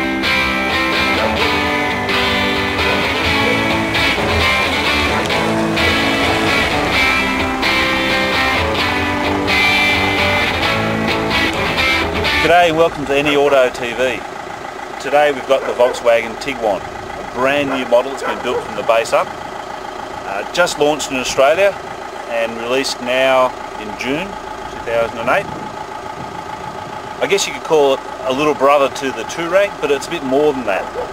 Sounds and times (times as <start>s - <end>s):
Car: 0.0s - 31.1s
Speech: 12.4s - 14.2s, 15.0s - 16.8s, 17.4s - 19.3s, 20.3s - 25.5s, 27.2s - 31.0s.